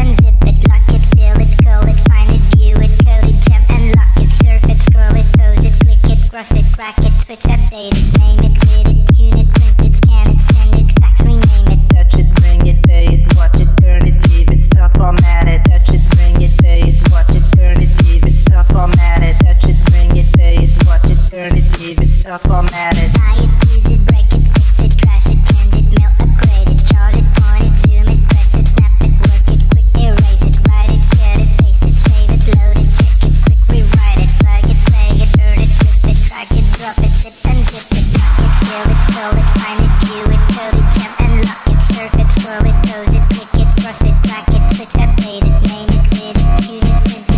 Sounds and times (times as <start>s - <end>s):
Electronic dance music: 0.0s - 47.3s.